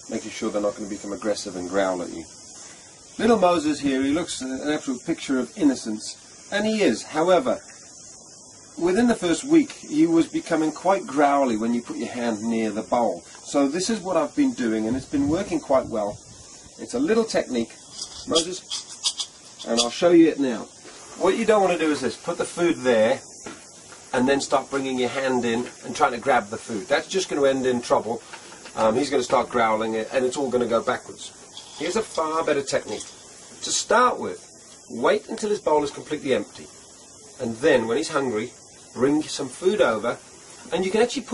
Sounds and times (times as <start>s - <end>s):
Speech: 0.1s - 2.3s, 3.2s - 7.6s, 8.8s - 16.2s, 16.8s - 18.7s, 19.6s - 23.2s, 24.1s - 36.7s, 37.4s - 41.3s.